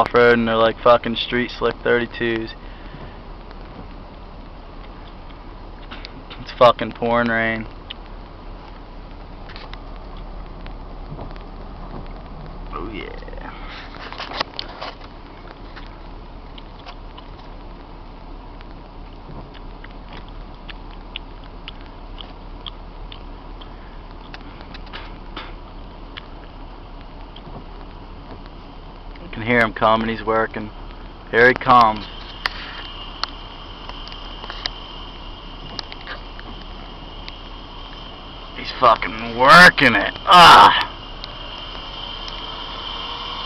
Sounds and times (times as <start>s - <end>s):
Speech: 0.0s - 2.6s, 6.4s - 7.7s, 12.7s - 13.5s, 29.2s - 30.7s, 31.3s - 32.0s, 38.6s - 40.9s.